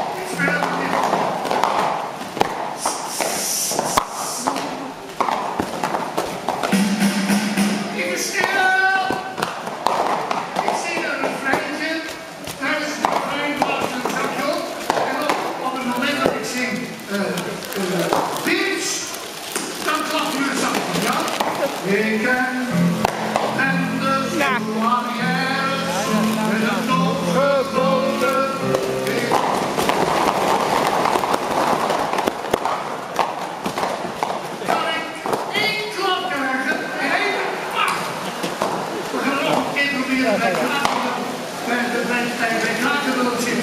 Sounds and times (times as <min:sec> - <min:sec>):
Speech: 0:00.2 - 0:01.2, 0:07.9 - 0:09.3, 0:24.1 - 0:28.2, 0:34.7 - 0:38.0, 0:39.1 - 0:43.6
Music: 0:06.7 - 0:08.4, 0:21.9 - 0:30.3.